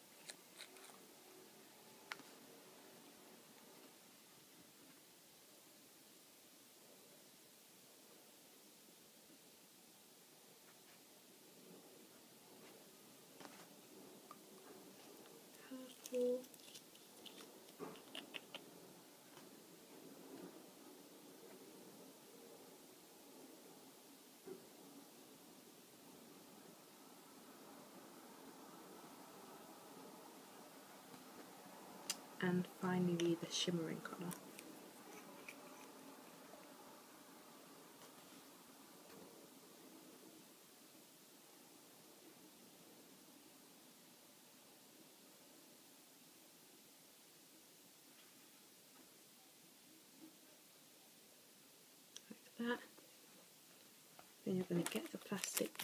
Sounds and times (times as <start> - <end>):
Silence: 0.0 - 54.6.